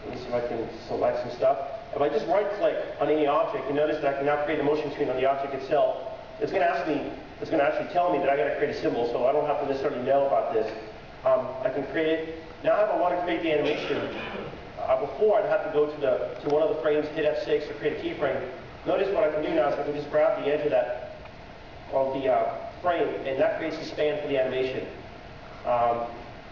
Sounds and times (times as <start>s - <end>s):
Speech: 0.0s - 21.1s, 21.9s - 25.0s, 25.6s - 26.2s.